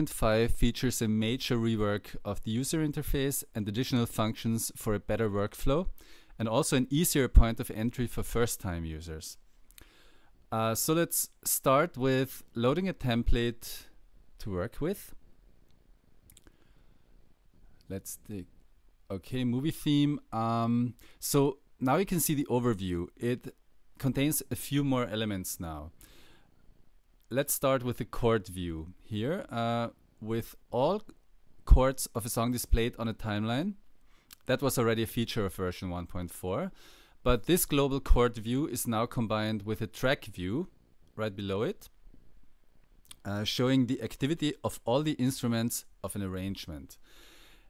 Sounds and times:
Speech: 0.0s - 9.4s, 10.5s - 15.2s, 17.9s - 18.5s, 19.1s - 26.0s, 27.3s - 33.8s, 34.4s - 42.0s, 43.1s - 47.0s.

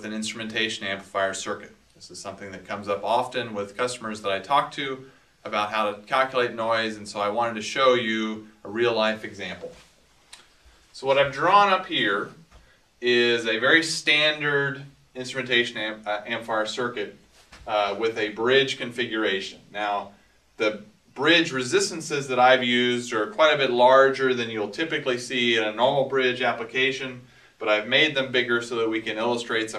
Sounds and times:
Speech: 0.0s - 9.9s, 11.0s - 29.7s.

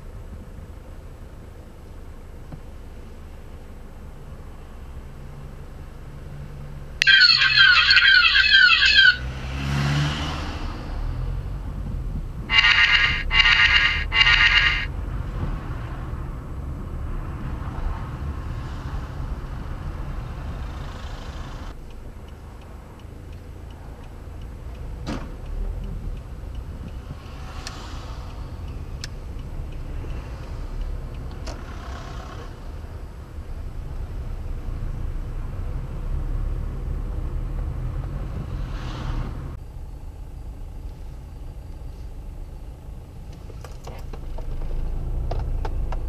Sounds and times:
Car: 0.0s - 46.0s.

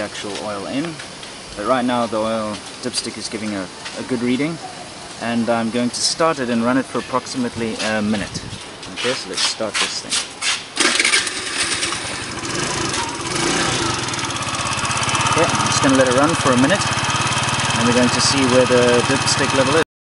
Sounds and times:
Speech: 0.0s - 1.0s, 1.6s - 4.6s, 5.2s - 10.2s, 15.4s - 16.9s, 17.8s - 19.9s
Vehicle: 10.4s - 19.8s
Engine starting: 10.8s - 13.8s.

